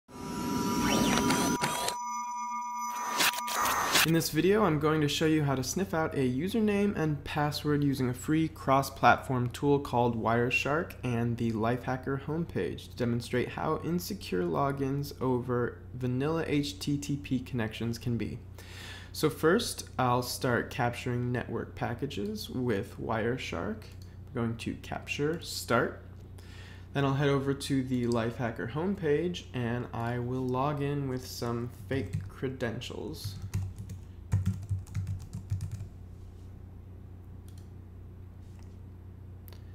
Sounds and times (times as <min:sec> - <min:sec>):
Speech: 0:04.1 - 0:18.4, 0:19.2 - 0:26.0, 0:26.9 - 0:33.4.